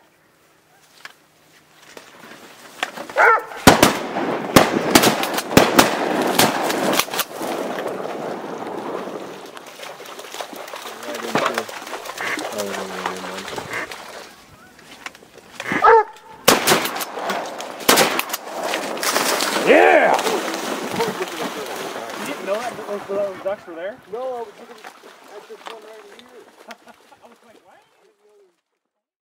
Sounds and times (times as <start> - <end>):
Speech: 11.0 - 11.7, 12.3 - 13.5, 19.7 - 20.4, 21.0 - 26.5, 27.2 - 28.6.